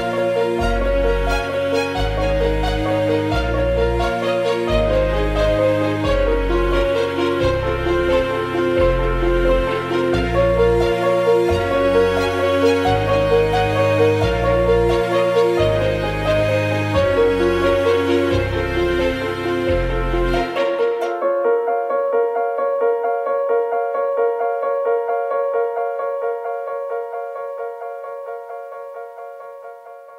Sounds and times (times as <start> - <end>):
Music: 0.0 - 30.1.